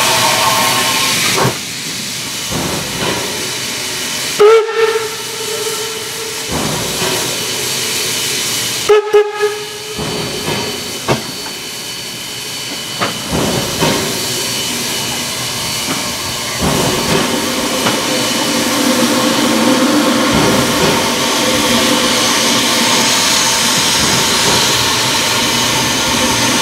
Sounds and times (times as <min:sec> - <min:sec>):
Hiss: 0:00.0 - 0:26.6
Steam whistle: 0:04.3 - 0:06.5, 0:08.8 - 0:10.0.